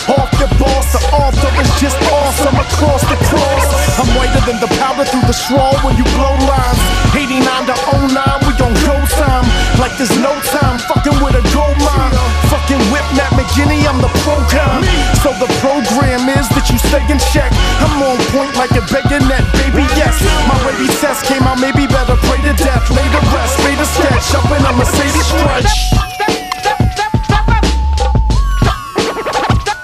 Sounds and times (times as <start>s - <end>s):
Hip hop music: 0.0s - 29.8s
Singing: 0.0s - 29.8s.